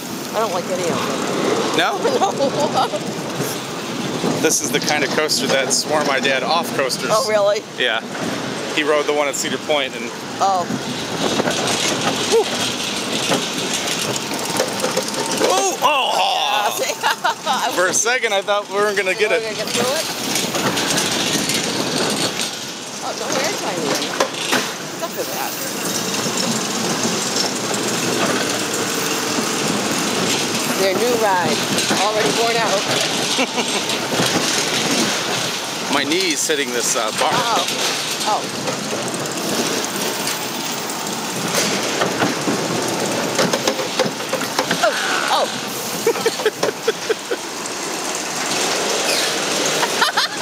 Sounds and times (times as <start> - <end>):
Outside, urban or manmade: 0.0 - 50.4.